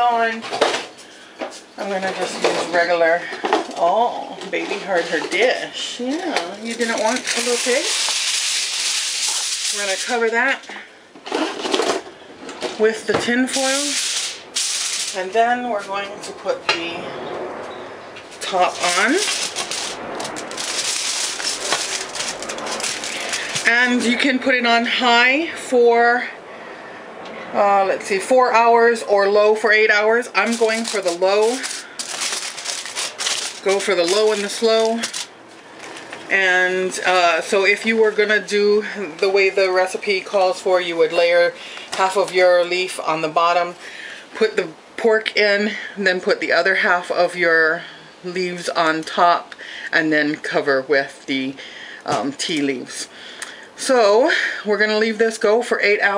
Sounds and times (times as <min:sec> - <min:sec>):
Crackle: 0:06.6 - 0:10.3, 0:13.5 - 0:15.2, 0:18.3 - 0:23.9, 0:30.4 - 0:36.3.